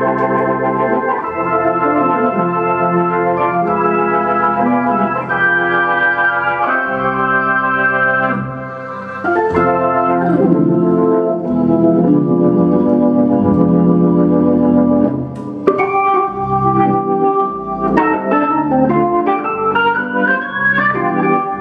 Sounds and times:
Hammond organ: 0.0 - 21.6.

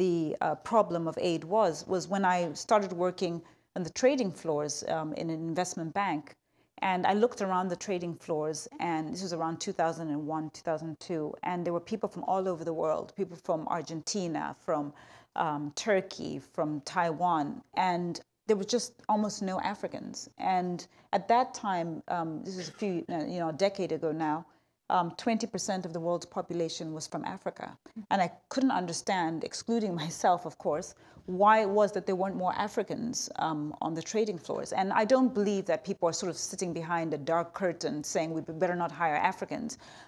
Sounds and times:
Female speech, woman speaking: 0.0 - 39.8.

